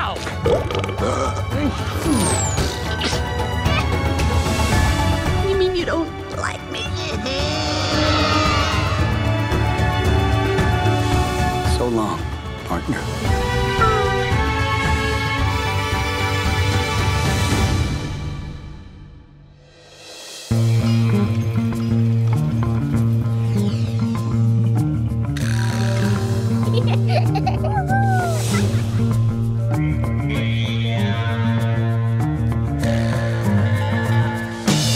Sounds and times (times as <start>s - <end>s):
Music: 0.0s - 34.9s.